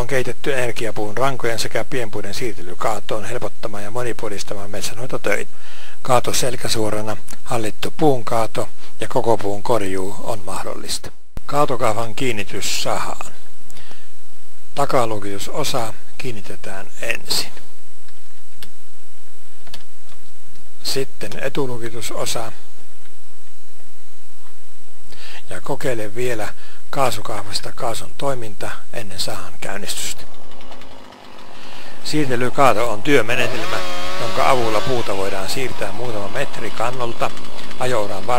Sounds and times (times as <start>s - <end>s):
Speech: 0.0s - 13.4s, 14.8s - 17.7s, 20.8s - 22.7s, 25.4s - 30.3s, 32.0s - 38.3s.